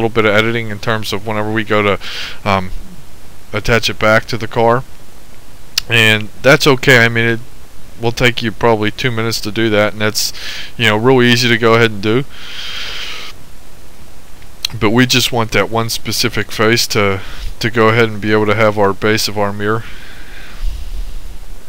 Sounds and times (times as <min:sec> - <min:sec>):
Speech: 0:00.0 - 0:02.8, 0:03.5 - 0:04.9, 0:05.8 - 0:07.4, 0:08.0 - 0:12.3, 0:14.7 - 0:19.9.